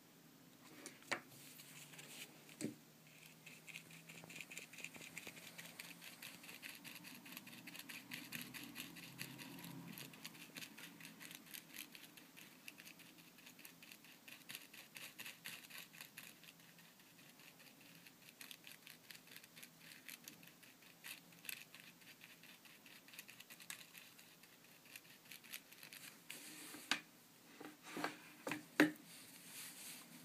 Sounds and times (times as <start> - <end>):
Writing: 1.4 - 26.9.